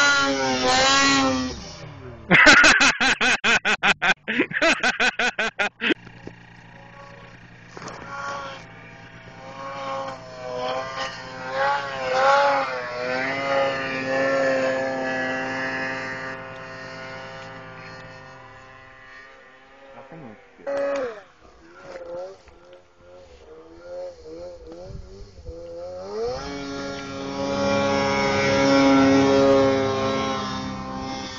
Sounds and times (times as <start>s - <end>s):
Speech: 20.0s - 20.4s.